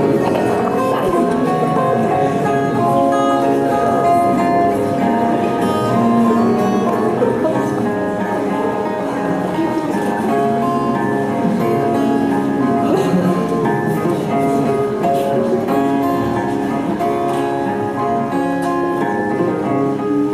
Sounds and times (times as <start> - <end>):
Speech: 0.0 - 17.0.